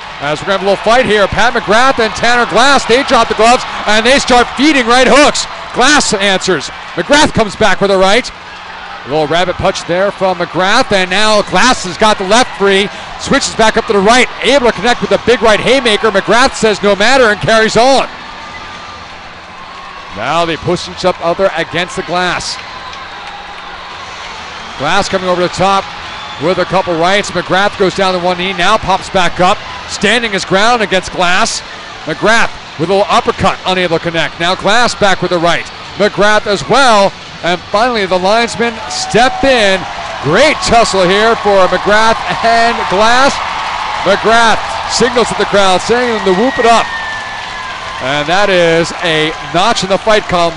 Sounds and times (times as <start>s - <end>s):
Speech: 0.2s - 8.3s, 9.1s - 18.1s, 20.2s - 22.6s, 24.8s - 25.8s, 26.4s - 43.4s, 44.0s - 46.9s, 48.0s - 50.5s.